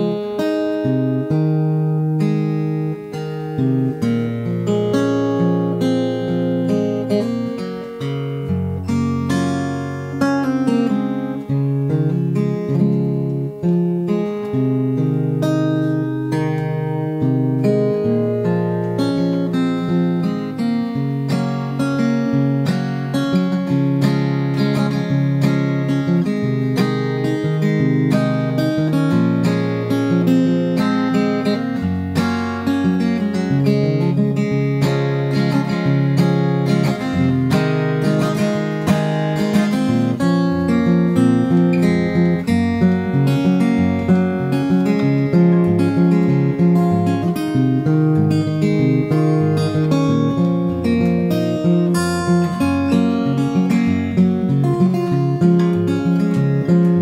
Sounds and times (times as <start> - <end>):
Acoustic guitar: 0.0 - 57.0
Strum: 0.0 - 57.0.